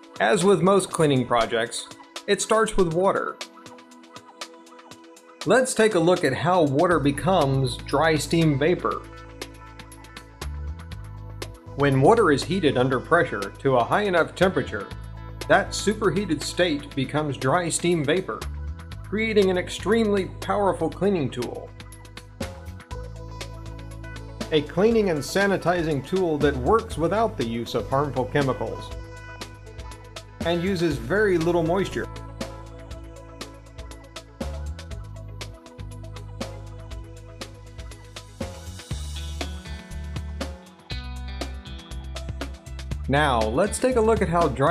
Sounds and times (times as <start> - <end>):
Music: 0.0 - 44.7
Speech: 0.2 - 3.4, 5.5 - 9.0, 11.8 - 14.9, 15.5 - 18.4, 19.1 - 21.7, 24.5 - 28.9, 30.4 - 32.1, 43.1 - 44.7.